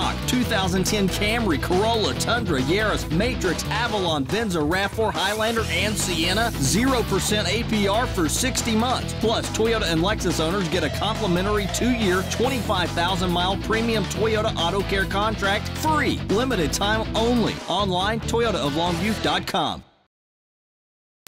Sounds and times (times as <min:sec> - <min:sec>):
Speech: 0:00.0 - 0:19.9.